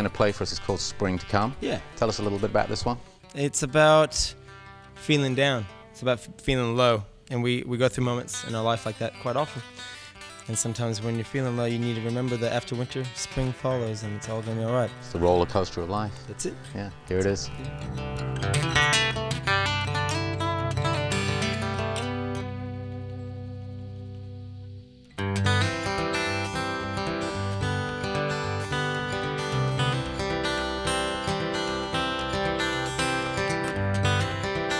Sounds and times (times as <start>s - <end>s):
Acoustic guitar: 0.0s - 34.8s
Strum: 0.0s - 34.8s.